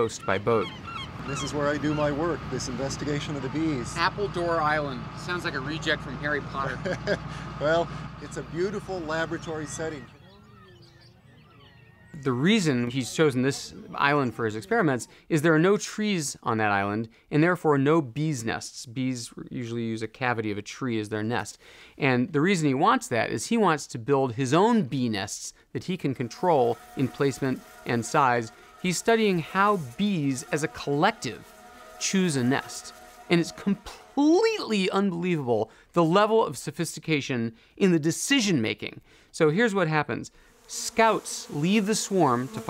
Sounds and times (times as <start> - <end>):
Speech: 0.0 - 0.7, 1.3 - 6.9, 7.6 - 10.4, 12.2 - 31.4, 32.0 - 42.7.